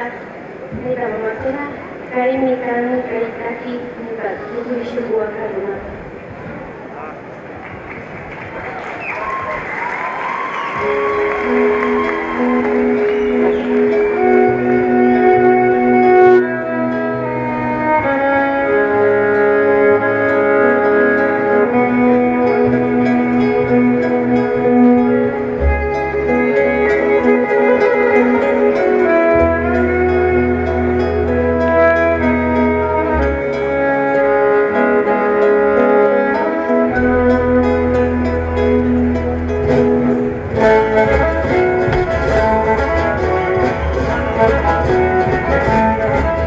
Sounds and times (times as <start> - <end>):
Inside, large room or hall: 0.0 - 46.4
Inside, public space: 0.0 - 46.4
Music: 10.2 - 46.4.